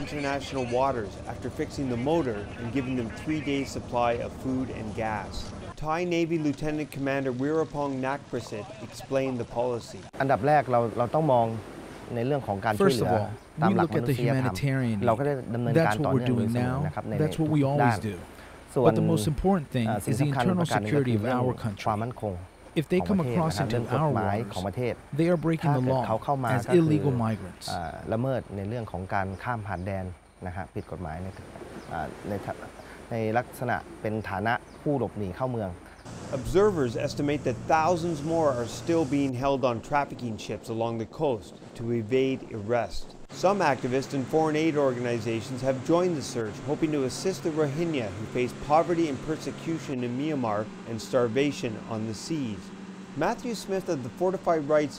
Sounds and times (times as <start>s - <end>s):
Speech: 0.0s - 54.9s.